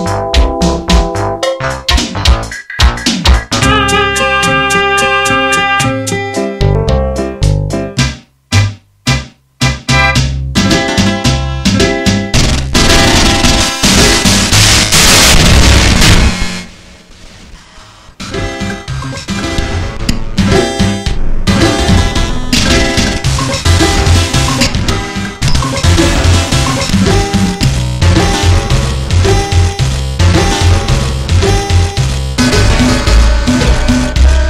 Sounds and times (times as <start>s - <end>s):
Synthesizer: 9.7s - 34.5s.